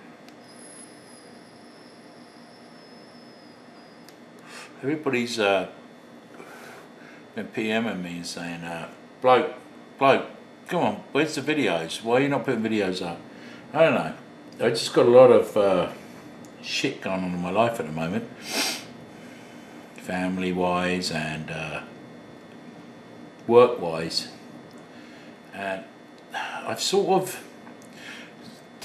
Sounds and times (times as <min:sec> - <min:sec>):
Speech: 0:04.8 - 0:05.8, 0:07.4 - 0:16.0, 0:16.6 - 0:18.3, 0:20.0 - 0:21.9, 0:23.5 - 0:24.4, 0:25.5 - 0:27.5.